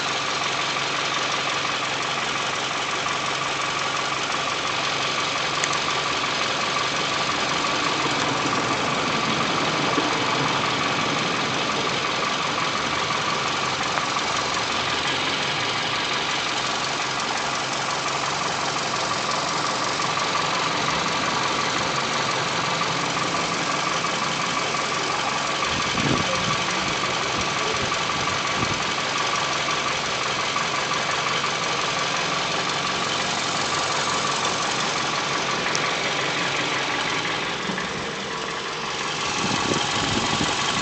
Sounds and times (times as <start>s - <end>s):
Car: 0.0s - 40.8s
Engine: 0.0s - 40.8s.